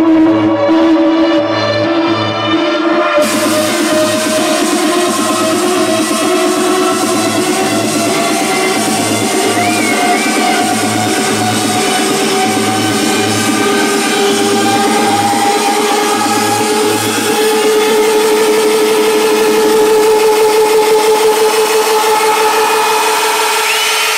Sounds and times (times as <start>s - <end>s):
Music: 0.0s - 24.1s.